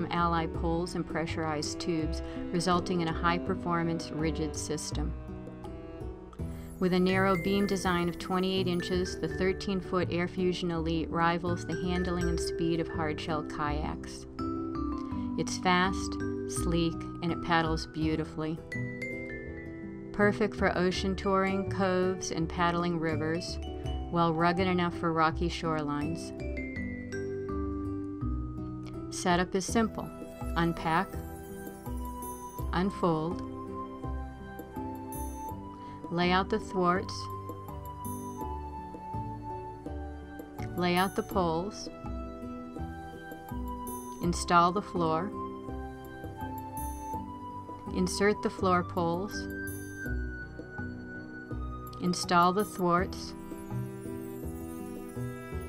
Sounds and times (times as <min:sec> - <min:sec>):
Speech: 0:00.0 - 0:05.1, 0:06.8 - 0:14.2, 0:15.4 - 0:18.6, 0:20.2 - 0:26.4, 0:29.1 - 0:31.1, 0:32.8 - 0:33.4, 0:36.1 - 0:37.3, 0:40.7 - 0:41.9, 0:44.2 - 0:45.3, 0:47.9 - 0:49.5, 0:52.0 - 0:53.4
Music: 0:00.0 - 0:55.6.